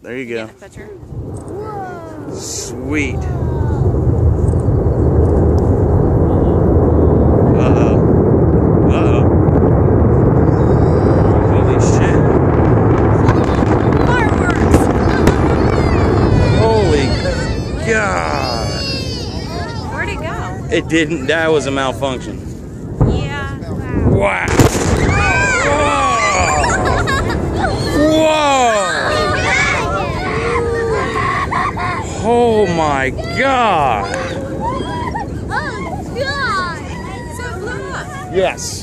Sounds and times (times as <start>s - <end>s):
Burst, pop: 24.4s - 25.5s.